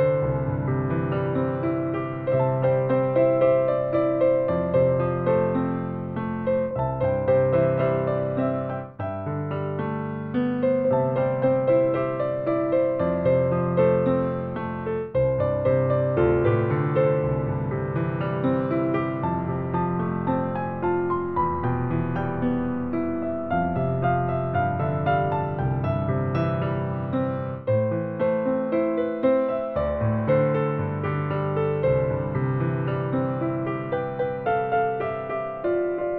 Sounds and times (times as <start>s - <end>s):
Music: 0.0s - 36.1s.